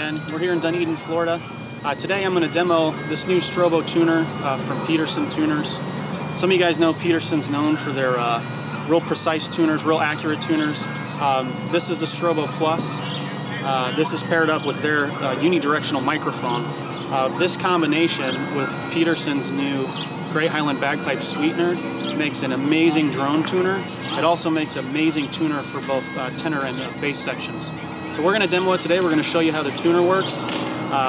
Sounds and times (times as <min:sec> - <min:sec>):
Bagpipes: 0:00.0 - 0:31.0
Wind instrument, woodwind instrument: 0:00.0 - 0:31.0.